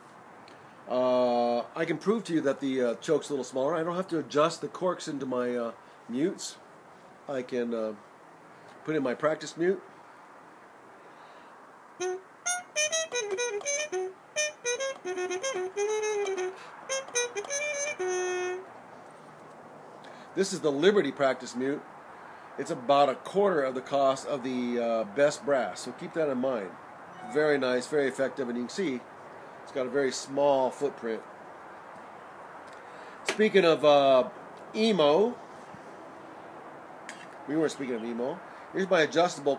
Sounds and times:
Speech: 0.9s - 6.6s, 7.3s - 8.0s, 8.8s - 9.9s, 20.4s - 21.8s, 22.6s - 29.0s, 29.7s - 31.2s, 33.2s - 35.4s, 37.4s - 39.5s
Trumpet: 12.0s - 18.7s, 27.1s - 28.0s.

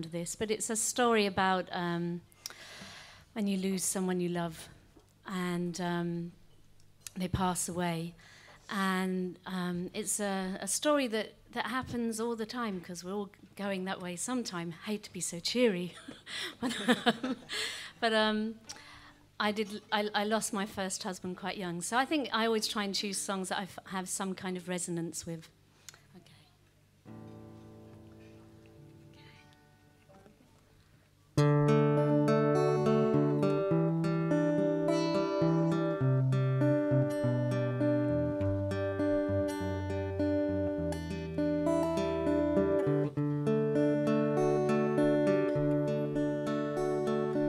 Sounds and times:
Speech: 0.0s - 2.2s, 3.4s - 6.4s, 7.1s - 16.0s, 18.0s - 18.6s, 19.4s - 25.5s, 26.1s - 26.6s, 30.0s - 30.8s.

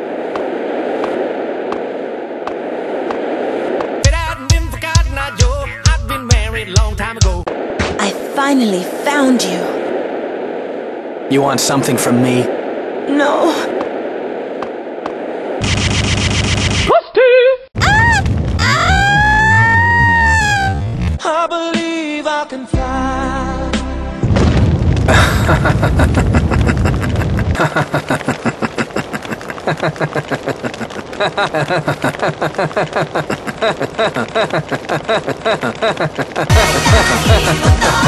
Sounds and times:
Music: 21.6s - 24.3s, 36.5s - 38.0s
Boom: 24.2s - 27.4s.

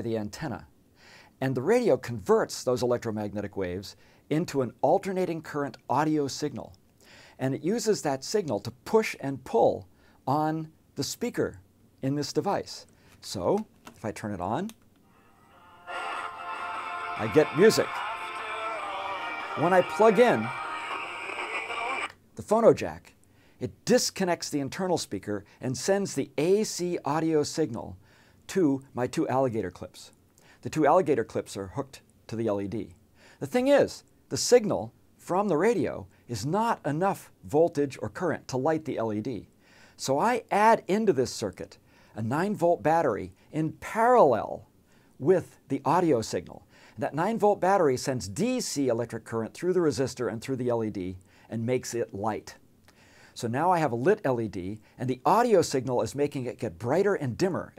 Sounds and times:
Speech: 0.0s - 0.7s, 1.4s - 6.8s, 7.4s - 14.8s, 17.2s - 52.6s, 53.4s - 57.7s
Music: 15.1s - 22.1s.

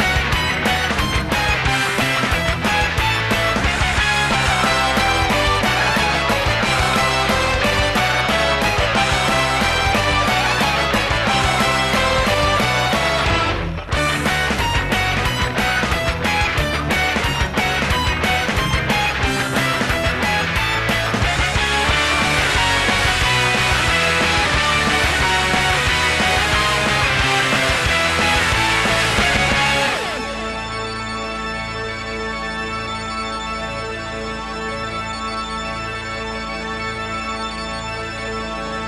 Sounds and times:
Music: 0.0s - 38.8s.

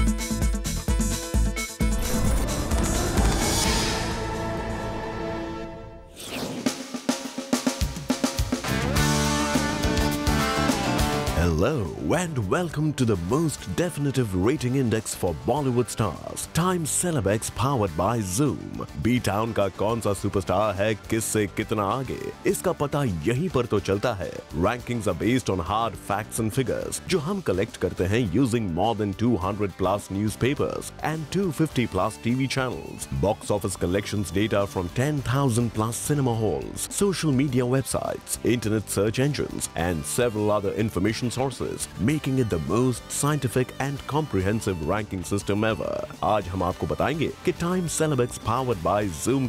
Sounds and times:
Drum kit: 0.0s - 5.4s, 6.4s - 14.8s
Drum roll: 1.7s - 5.7s.

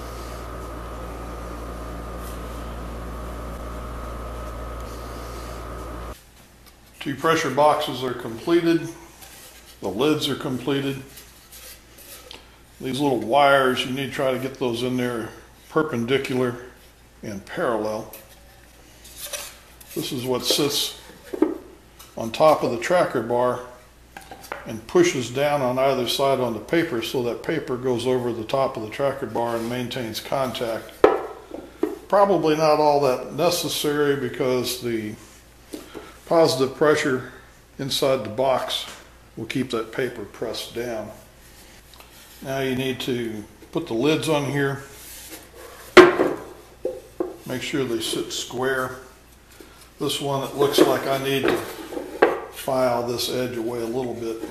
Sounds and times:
Speech: 7.0s - 9.0s, 9.8s - 11.1s, 12.8s - 18.2s, 19.9s - 21.1s, 22.2s - 23.8s, 24.6s - 31.0s, 32.1s - 35.3s, 36.3s - 41.3s, 42.4s - 45.0s, 47.4s - 49.2s, 50.0s - 51.8s, 52.6s - 54.5s.

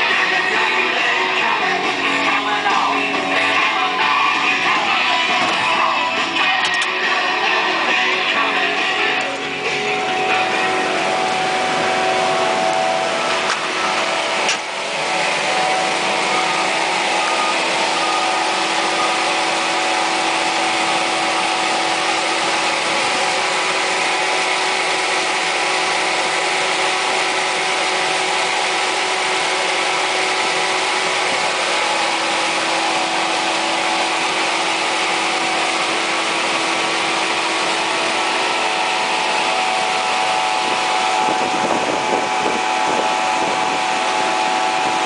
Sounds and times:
Outside, rural or natural: 0.0s - 45.0s
Truck: 0.0s - 45.0s.

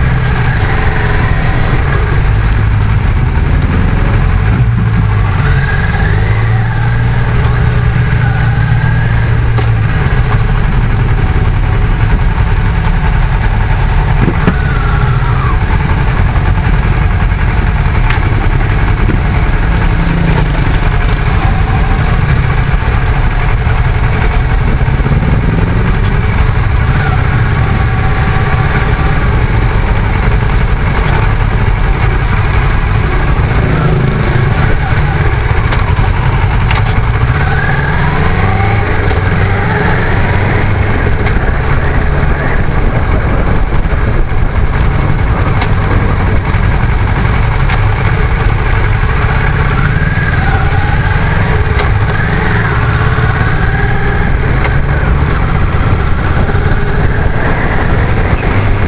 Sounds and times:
Idling: 0.0s - 58.8s
Motorcycle: 0.0s - 58.8s.

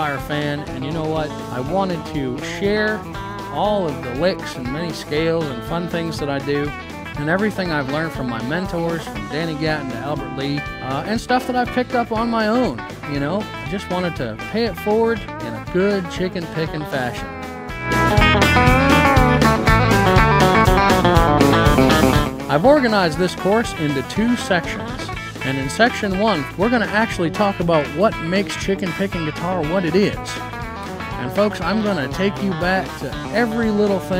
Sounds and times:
Electric guitar: 0.0s - 16.1s, 16.7s - 34.1s
Speech: 0.0s - 17.3s, 22.5s - 30.4s, 31.2s - 34.1s.

